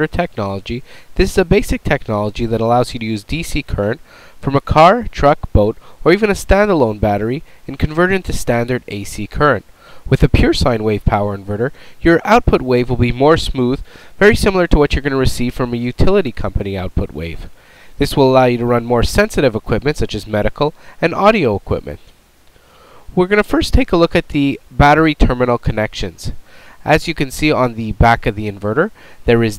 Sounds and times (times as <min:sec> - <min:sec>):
Speech: 0:00.0 - 0:22.1, 0:23.1 - 0:29.5.